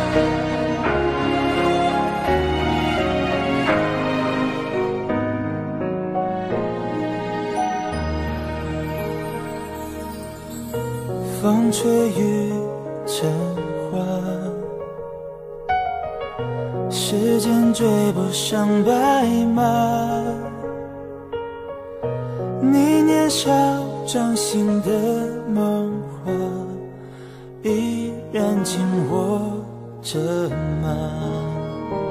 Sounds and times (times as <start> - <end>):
Music: 0.0 - 32.1.